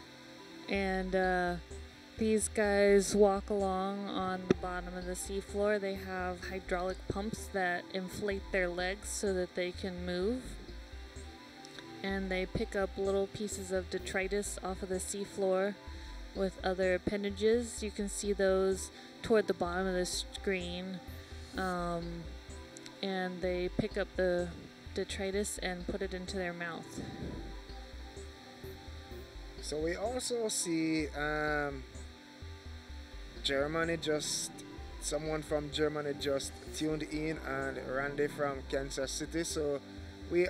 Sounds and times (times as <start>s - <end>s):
Speech: 0.7s - 1.6s, 2.2s - 10.5s, 12.0s - 15.7s, 21.6s - 22.2s, 23.0s - 27.2s.